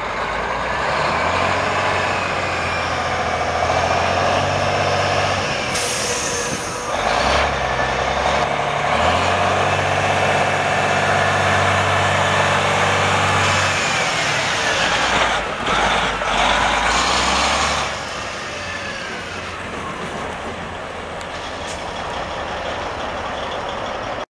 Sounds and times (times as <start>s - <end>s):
Truck: 0.0s - 24.3s.